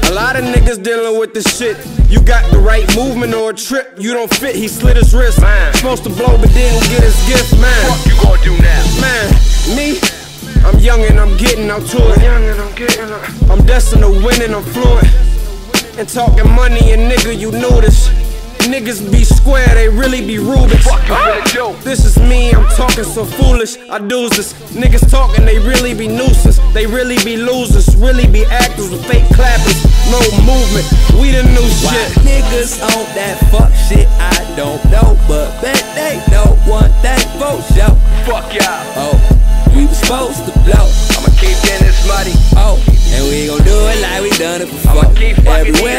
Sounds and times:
Rhythm and blues: 0:00.0 - 0:45.9.

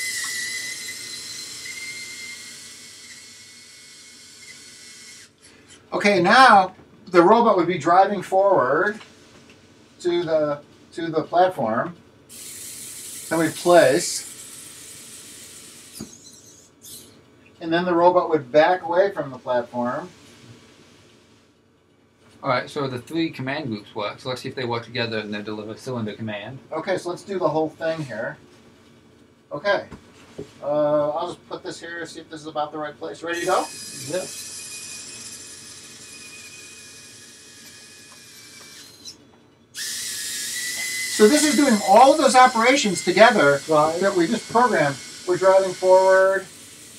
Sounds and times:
Speech: 0:05.9 - 0:09.0, 0:10.0 - 0:12.0, 0:17.6 - 0:20.1, 0:22.4 - 0:28.4, 0:30.6 - 0:34.3, 0:41.2 - 0:46.5.

